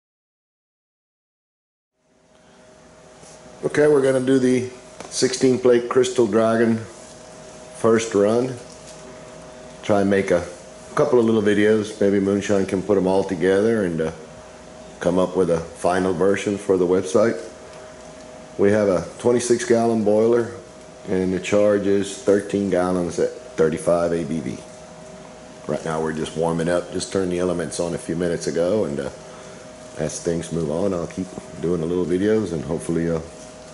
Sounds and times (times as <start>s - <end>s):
Speech: 3.6s - 7.0s, 7.8s - 8.7s, 9.8s - 14.3s, 15.0s - 17.6s, 18.6s - 24.7s, 25.6s - 29.2s, 30.0s - 33.4s.